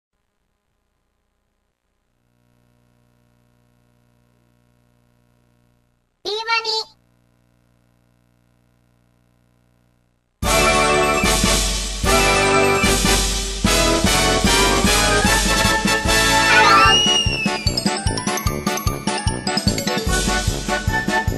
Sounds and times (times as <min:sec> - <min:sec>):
Speech: 0:06.3 - 0:07.0.